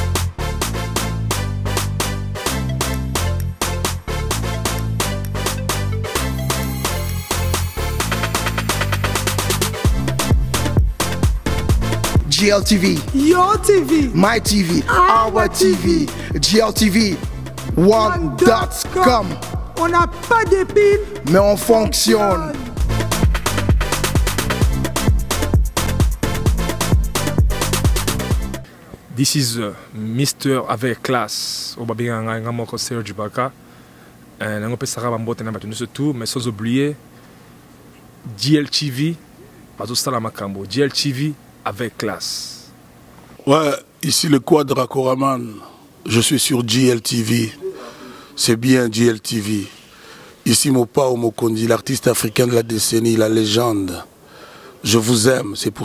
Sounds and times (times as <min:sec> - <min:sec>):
Afrobeat: 0:00.0 - 0:28.7.